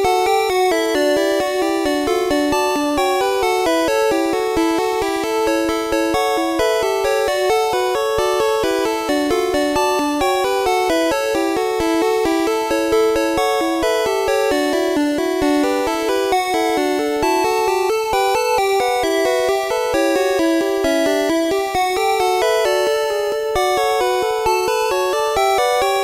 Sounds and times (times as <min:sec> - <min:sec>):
Video game music: 0:00.0 - 0:26.0.